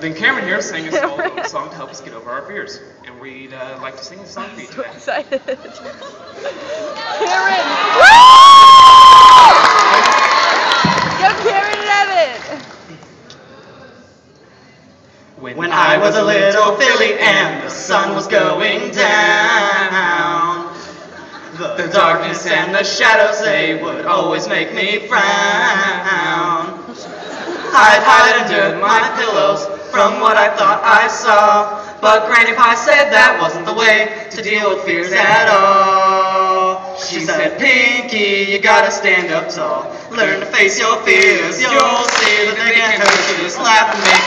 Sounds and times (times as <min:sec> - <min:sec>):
Giggle: 0:00.8 - 0:02.1, 0:04.4 - 0:07.3, 0:26.9 - 0:27.8.